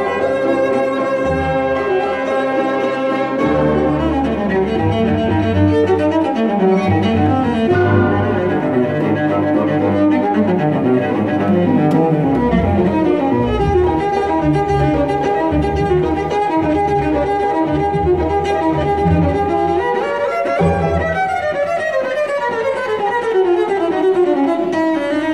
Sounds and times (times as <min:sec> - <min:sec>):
Double bass: 0:00.0 - 0:20.0
Cello: 0:00.0 - 0:25.3
Classical music: 0:00.0 - 0:25.3
Violin, fiddle: 0:00.0 - 0:25.3.